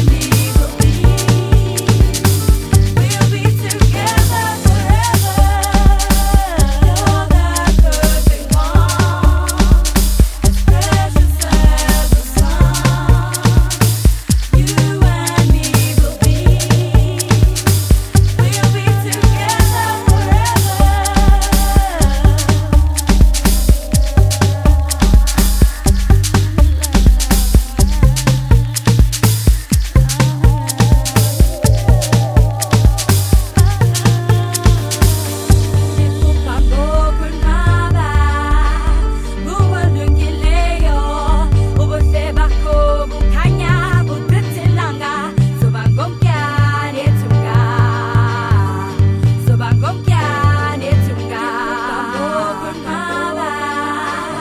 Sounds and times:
Electronic dance music: 0.0s - 54.4s.

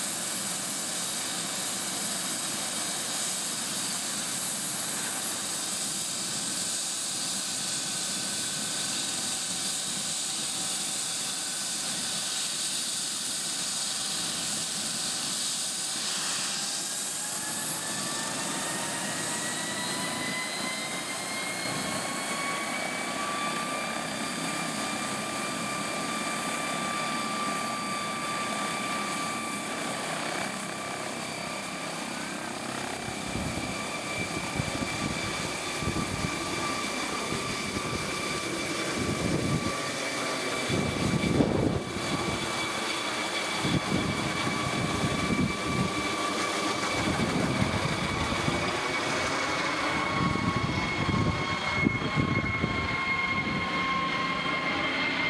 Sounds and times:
Fixed-wing aircraft, airplane: 0.0s - 55.3s
Helicopter: 0.0s - 55.3s.

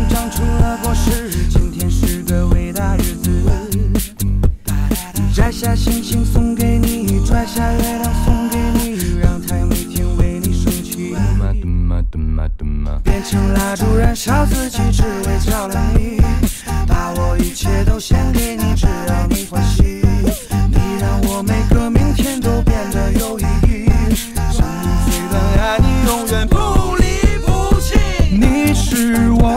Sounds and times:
Music: 0.0s - 11.6s, 12.9s - 29.5s.

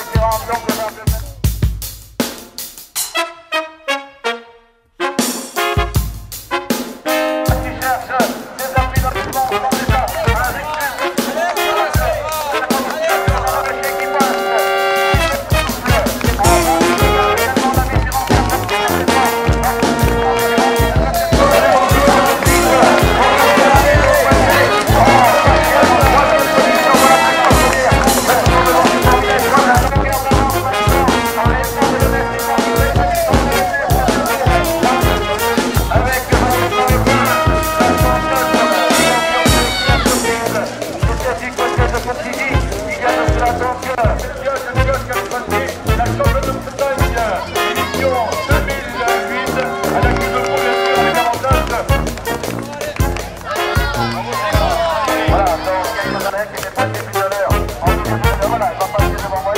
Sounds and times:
Speech: 0.0s - 1.5s, 7.4s - 59.5s
Music: 0.0s - 59.5s
Outside, urban or manmade: 8.3s - 59.5s.

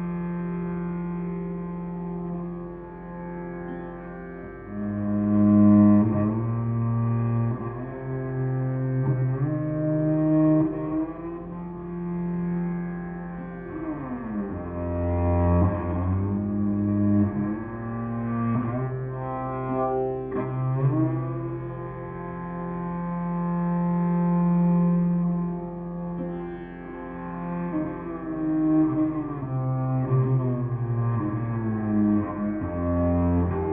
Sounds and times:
Cello: 0.0s - 33.7s
Classical music: 1.0s - 33.7s.

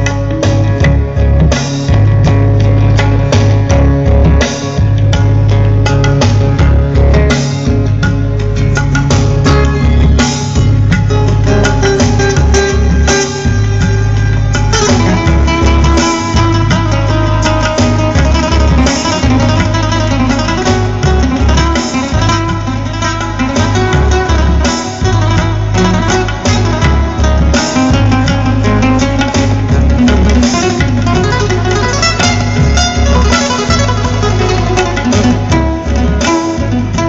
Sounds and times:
Musical instrument: 0.0s - 37.0s.

